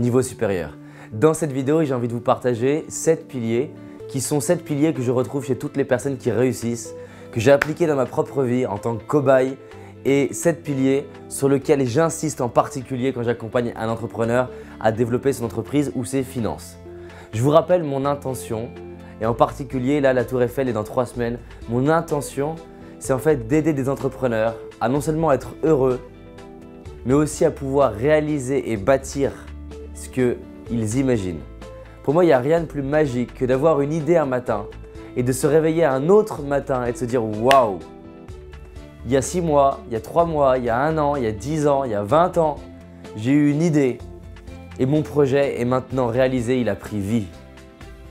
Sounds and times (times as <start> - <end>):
Speech: 0.0 - 26.1, 27.0 - 37.8, 39.0 - 42.6, 43.2 - 44.0, 44.8 - 47.4
Music: 0.0 - 48.1.